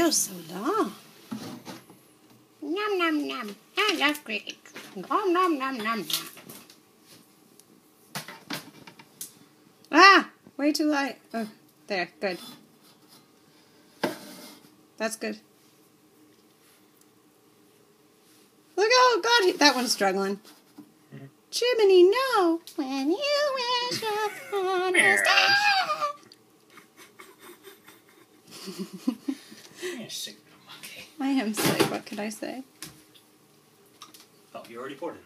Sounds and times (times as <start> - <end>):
Inside, small room: 0.0 - 35.2.